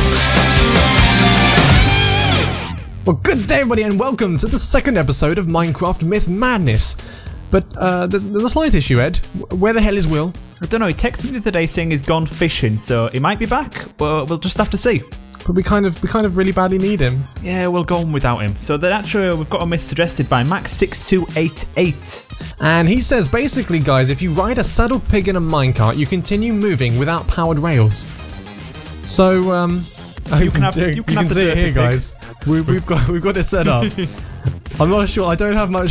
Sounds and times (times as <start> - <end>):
Music: 0.0 - 35.9
Speech: 3.1 - 28.1, 29.1 - 34.1, 34.8 - 35.9.